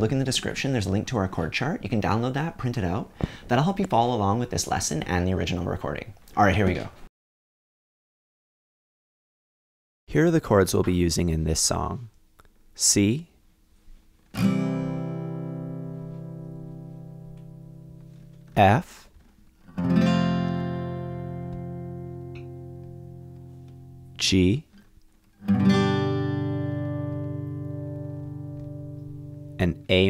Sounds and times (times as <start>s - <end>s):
Speech: 0.0s - 7.0s, 10.1s - 12.1s, 12.8s - 13.4s, 18.6s - 19.1s, 24.2s - 24.7s, 29.6s - 30.0s
Music: 14.4s - 18.6s, 19.7s - 24.2s, 25.4s - 30.0s.